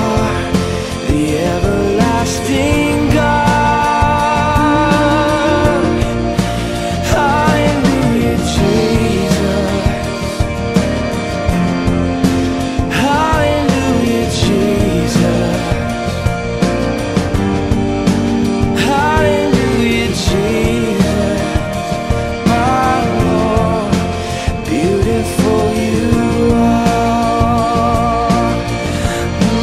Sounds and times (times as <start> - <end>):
Music: 0.0 - 29.6.